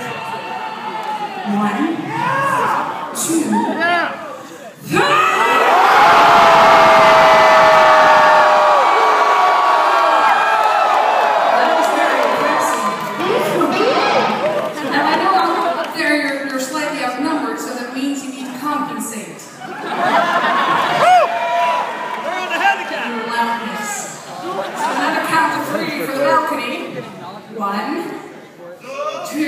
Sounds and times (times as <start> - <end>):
Crowd: 0.0 - 29.4.